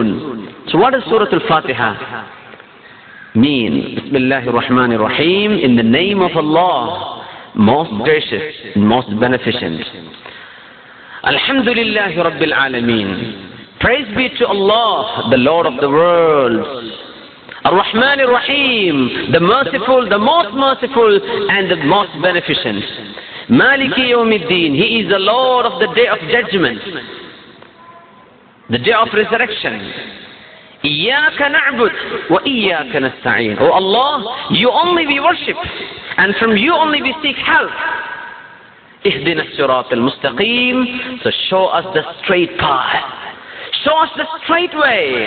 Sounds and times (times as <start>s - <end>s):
Male speech, man speaking: 0.0s - 2.3s, 3.4s - 10.1s, 11.2s - 17.0s, 17.6s - 27.1s, 28.7s - 30.0s, 30.8s - 37.9s, 39.0s - 45.2s
Narration, monologue: 0.0s - 45.2s.